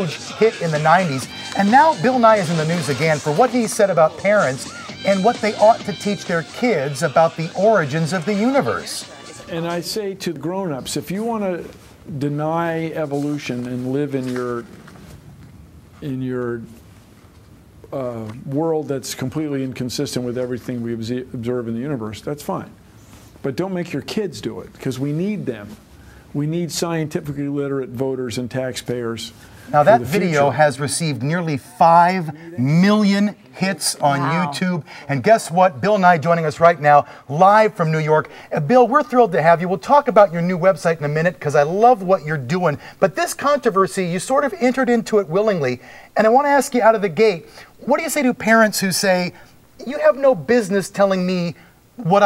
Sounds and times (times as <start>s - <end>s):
Speech: 0.0s - 14.7s, 16.0s - 16.8s, 17.9s - 22.8s, 23.4s - 25.8s, 26.4s - 52.2s.